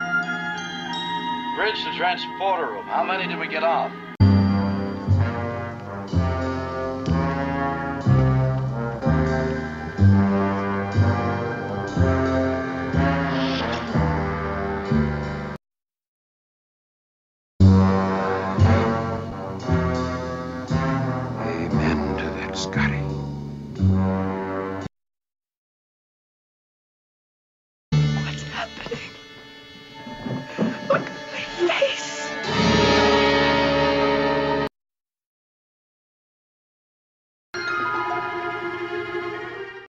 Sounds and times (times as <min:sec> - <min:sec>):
Music: 0:00.0 - 0:15.6, 0:17.6 - 0:24.9, 0:28.0 - 0:34.7, 0:37.6 - 0:39.8
Speech: 0:01.6 - 0:03.9, 0:21.4 - 0:23.2, 0:28.2 - 0:29.1, 0:30.9 - 0:32.3.